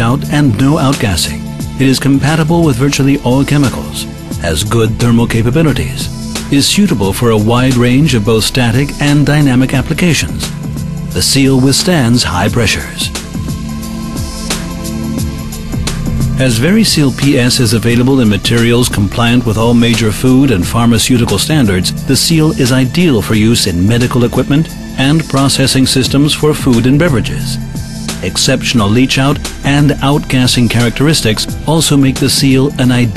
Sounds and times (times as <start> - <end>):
Speech: 0.0 - 10.5, 11.2 - 13.2, 16.4 - 27.6, 28.2 - 33.1
Music: 0.0 - 33.1.